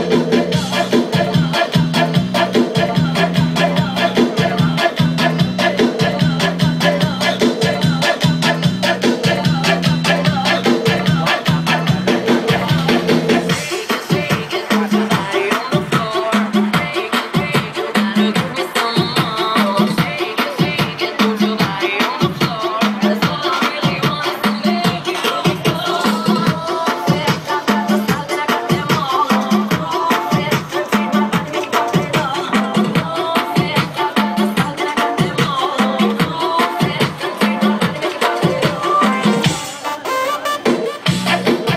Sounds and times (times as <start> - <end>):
Music: 0.0 - 41.7.